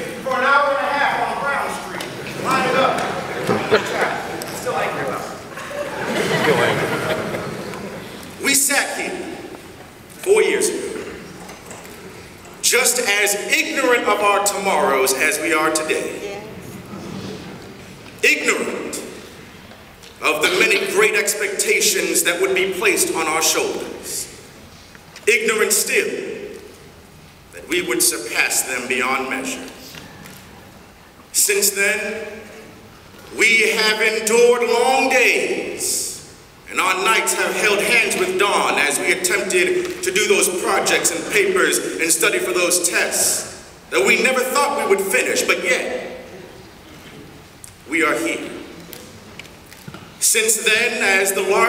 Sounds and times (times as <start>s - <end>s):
Male speech, man speaking: 0.0s - 5.4s, 8.4s - 9.3s, 10.2s - 11.1s, 12.6s - 16.2s, 18.2s - 19.1s, 20.2s - 24.3s, 25.3s - 26.4s, 27.6s - 29.8s, 31.4s - 32.4s, 33.3s - 46.2s, 47.9s - 48.7s, 50.2s - 51.6s
Narration, monologue: 0.0s - 16.8s, 17.4s - 51.6s.